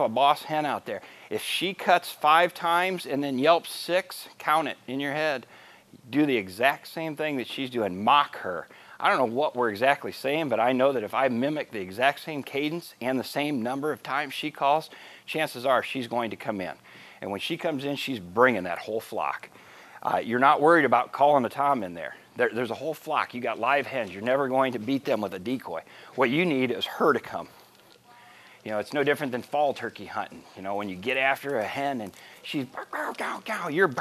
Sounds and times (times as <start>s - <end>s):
Speech: 0.0s - 5.5s, 6.1s - 27.5s, 28.1s - 34.0s.